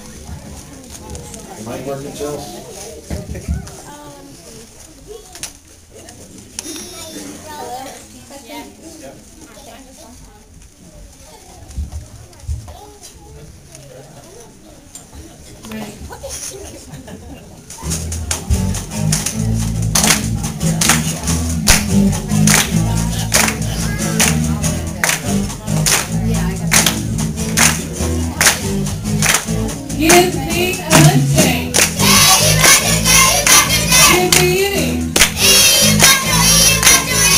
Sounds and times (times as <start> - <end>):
Music: 17.8 - 37.3.